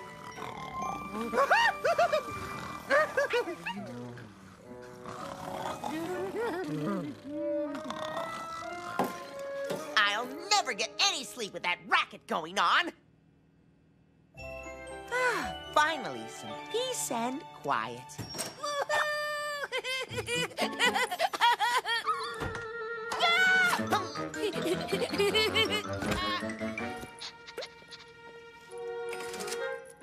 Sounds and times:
Music: 0.0 - 12.8, 14.3 - 18.6, 20.0 - 21.3, 22.4 - 30.0.

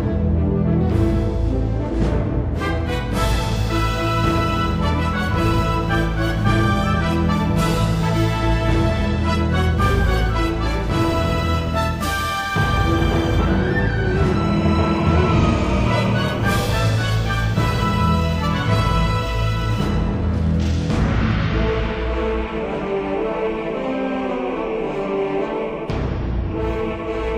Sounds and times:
Music: 0.0 - 27.3.

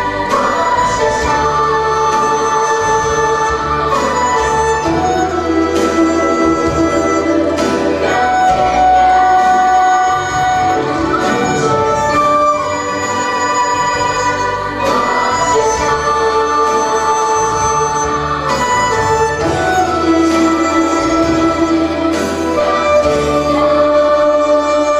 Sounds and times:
Music: 0.0 - 24.9.

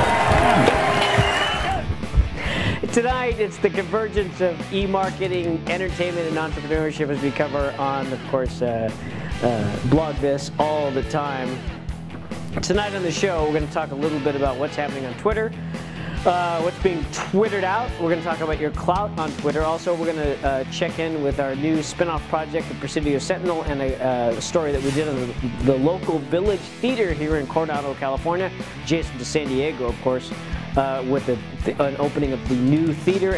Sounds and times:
Music: 0.0 - 33.3
Speech: 2.9 - 11.6, 12.6 - 15.5, 16.3 - 33.3.

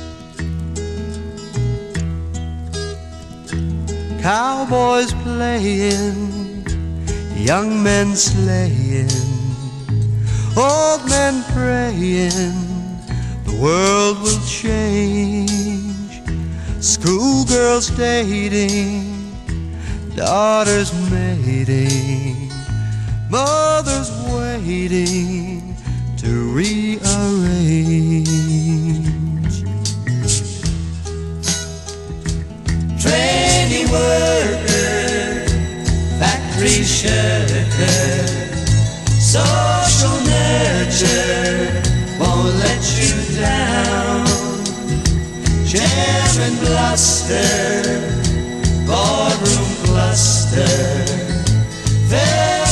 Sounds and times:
Music: 0.0 - 52.7.

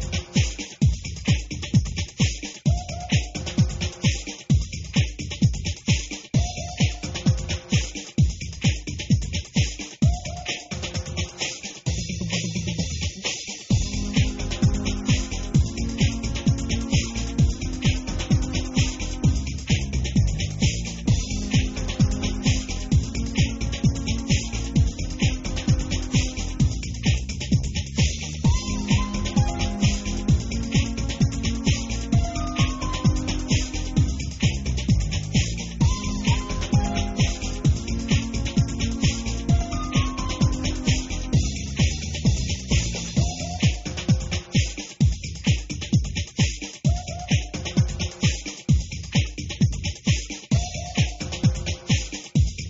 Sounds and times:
Music: 0.0 - 52.6.

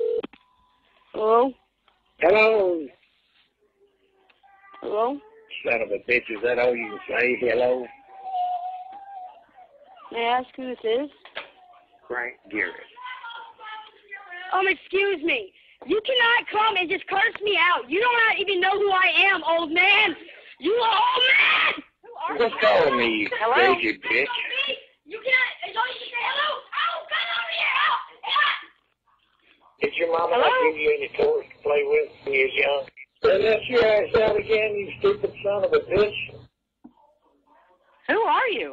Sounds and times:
Screaming: 20.9 - 21.9.

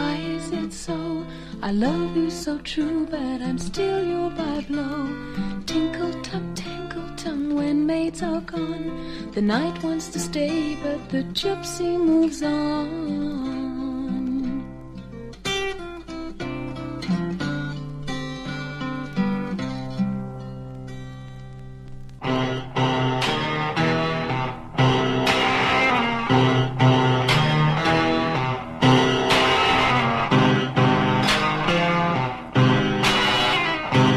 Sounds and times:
Acoustic guitar: 0.0 - 34.1.

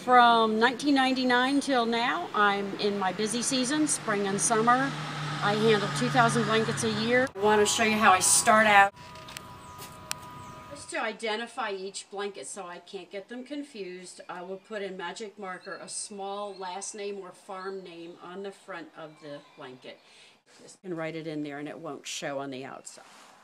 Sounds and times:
Speech: 0.0 - 8.9, 10.8 - 20.0, 20.6 - 23.0.

